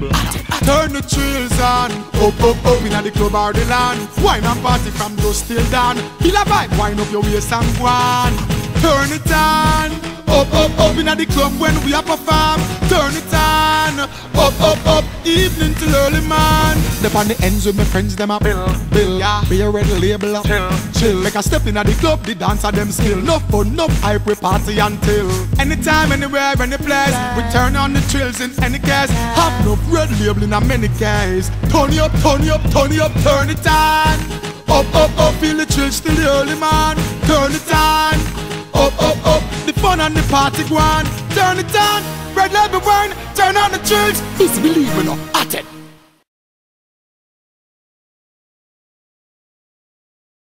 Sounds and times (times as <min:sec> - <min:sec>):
Music: 0:00.0 - 0:46.3.